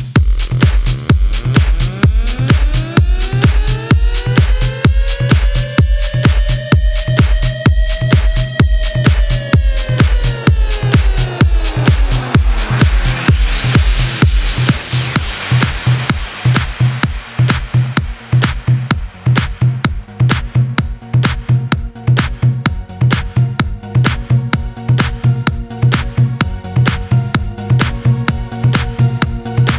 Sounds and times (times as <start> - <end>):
House music: 0.0 - 29.7.